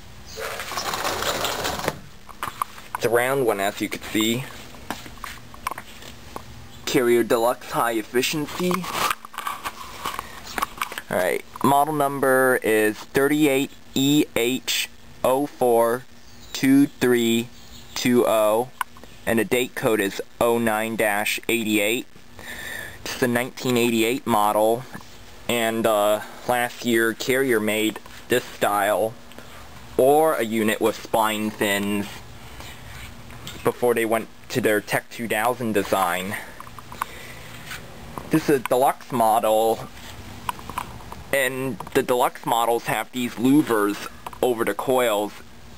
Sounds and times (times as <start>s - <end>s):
Speech: 3.0s - 4.6s, 6.8s - 8.9s, 11.1s - 22.1s, 23.1s - 29.2s, 30.0s - 32.2s, 33.6s - 36.6s, 38.3s - 39.9s, 41.3s - 45.4s.